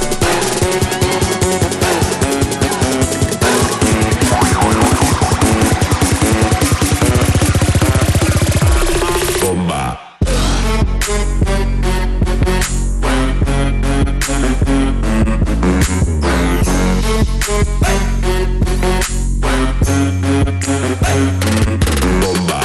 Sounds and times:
Music: 0.0s - 22.6s.

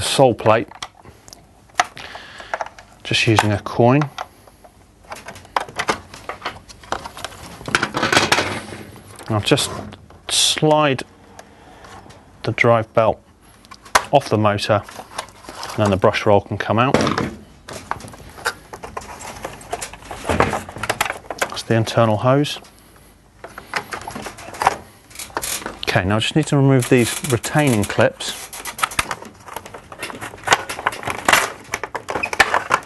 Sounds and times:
Speech: 0.0s - 0.7s, 3.0s - 4.1s, 9.2s - 11.1s, 12.4s - 13.2s, 14.1s - 14.9s, 15.8s - 17.2s, 21.4s - 22.7s, 25.8s - 28.4s.

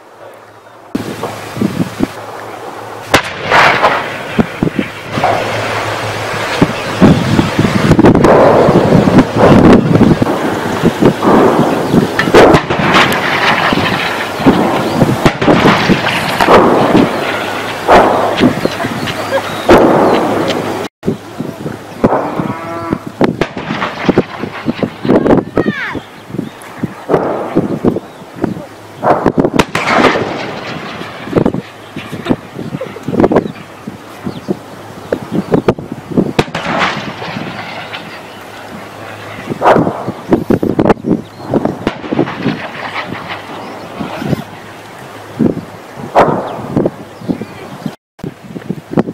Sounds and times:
Artillery fire: 3.0s - 20.9s, 22.0s - 22.4s, 23.4s - 25.4s, 27.0s - 27.9s, 29.0s - 32.5s, 36.4s - 41.0s, 41.7s - 44.6s, 46.1s - 47.0s.

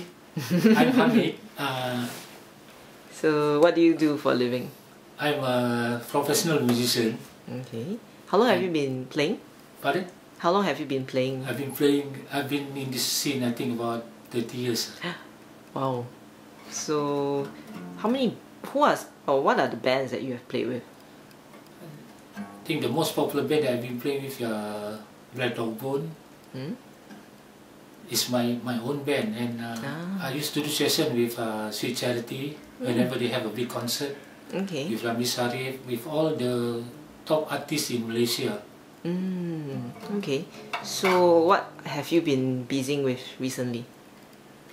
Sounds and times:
Speech: 0.8s - 2.2s, 3.2s - 15.0s, 16.8s - 20.8s, 22.7s - 26.8s, 28.1s - 43.9s.

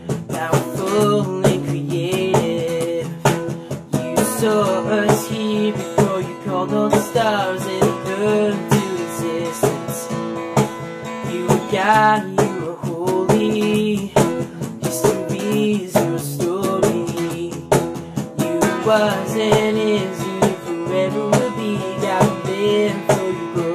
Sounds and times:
Plucked string instrument: 0.0s - 23.7s.

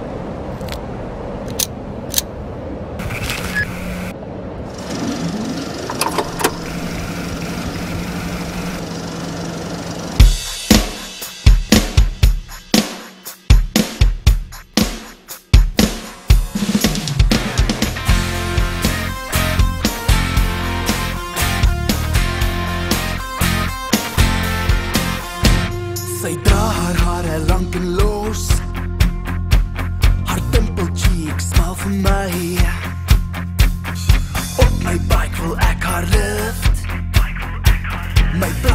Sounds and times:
Music: 10.2s - 38.7s.

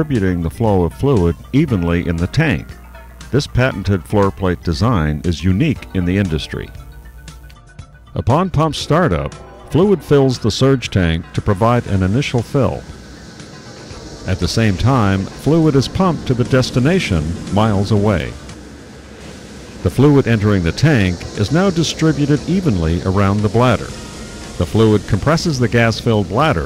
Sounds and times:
Speech: 0.0s - 2.8s, 3.4s - 6.7s, 8.2s - 12.8s, 14.3s - 18.4s, 19.8s - 23.9s, 24.6s - 26.6s
Music: 0.0s - 26.6s.

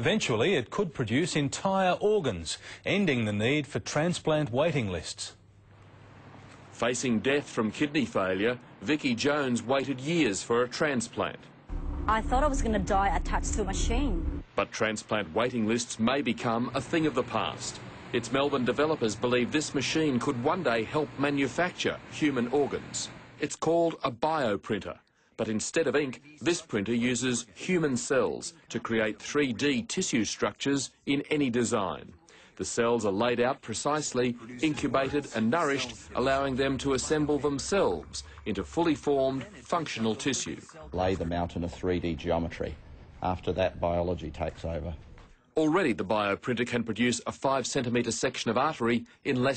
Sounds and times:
Speech: 0.0s - 5.4s, 6.8s - 11.5s, 12.1s - 45.0s, 45.6s - 49.5s.

